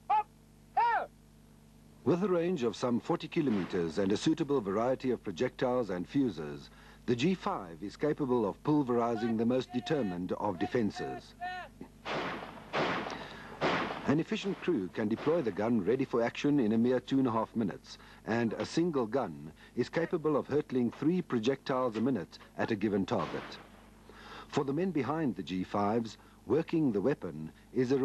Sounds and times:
Artillery fire: 3.4 - 4.1, 12.0 - 15.9, 23.1 - 23.8.

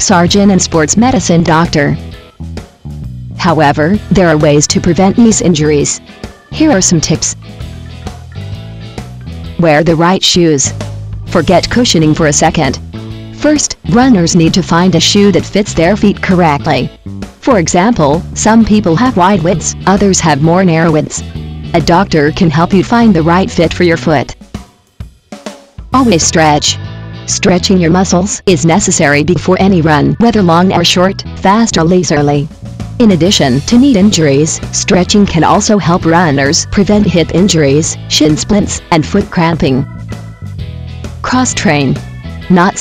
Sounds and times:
Speech: 0.0 - 2.0, 3.4 - 7.4, 9.6 - 12.8, 13.4 - 21.2, 21.8 - 24.4, 26.0 - 39.9, 41.2 - 42.8
Music: 0.0 - 42.8.

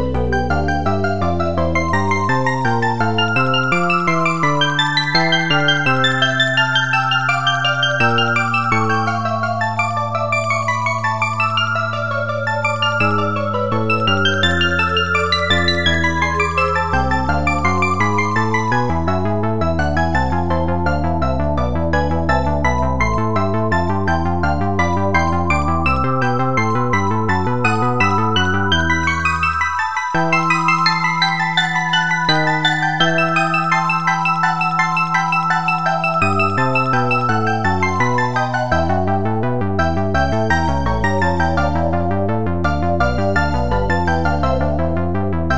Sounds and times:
Glockenspiel: 0.0 - 42.1
Marimba, xylophone: 3.2 - 18.7, 27.7 - 38.9.

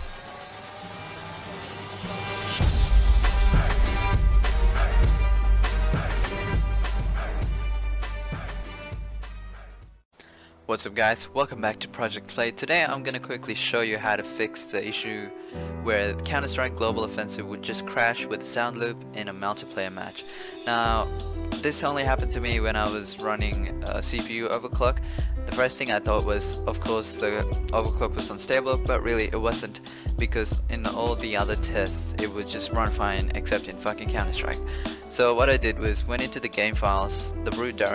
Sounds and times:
Music: 0.3 - 37.9
Speech: 10.7 - 37.9.

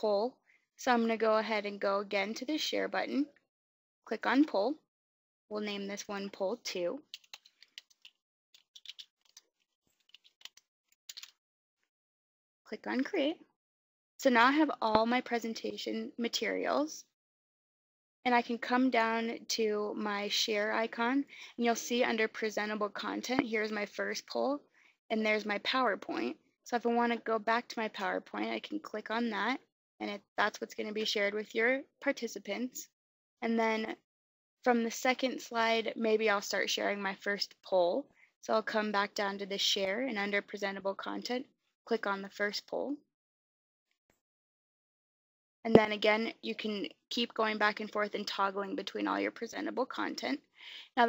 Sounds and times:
Speech: 0.0 - 3.3, 4.1 - 4.8, 5.5 - 7.0, 12.7 - 13.4, 14.2 - 17.1, 18.3 - 34.0, 34.6 - 43.0, 45.7 - 51.0
Inside, small room: 0.0 - 4.9, 5.5 - 11.4, 14.2 - 17.2, 18.3 - 43.0, 45.7 - 51.0.

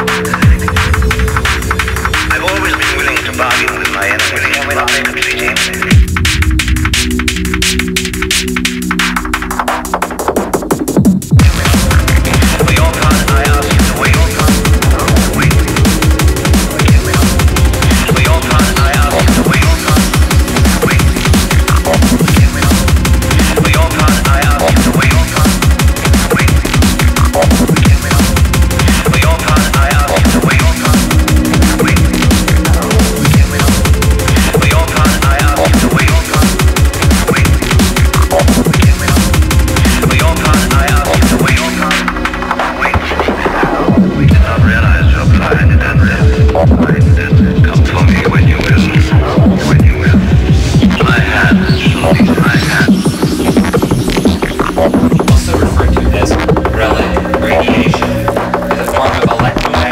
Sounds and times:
Music: 0.0 - 59.9.

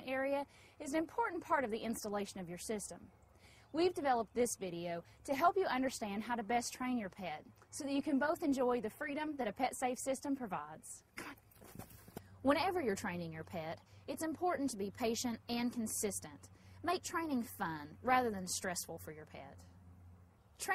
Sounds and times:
Speech: 0.0 - 3.1, 3.8 - 11.4, 12.4 - 19.6.

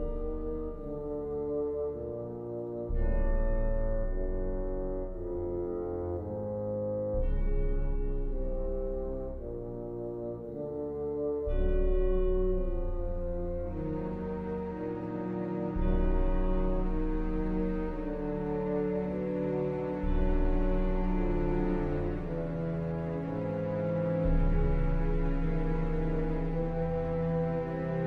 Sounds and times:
Music: 0.0 - 28.0.

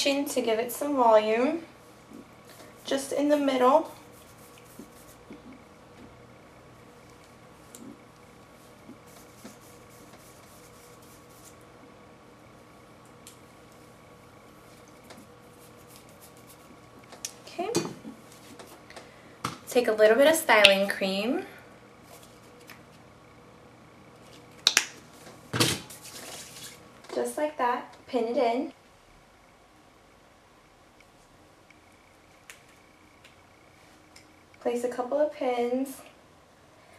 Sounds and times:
Inside, small room: 0.0 - 36.9
Speech: 2.9 - 4.0, 17.5 - 17.9, 19.7 - 21.6, 27.2 - 28.8, 34.6 - 36.1.

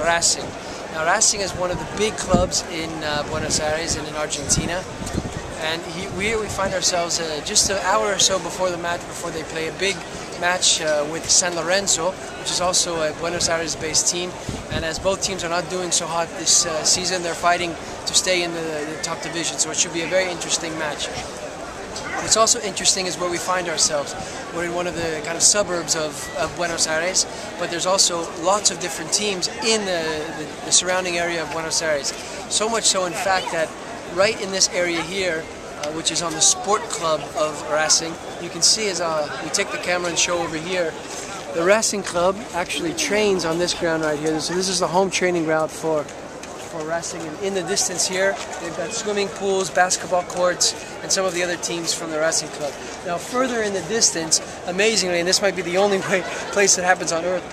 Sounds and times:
Speech: 0.0 - 4.9, 5.6 - 21.2, 22.0 - 57.5.

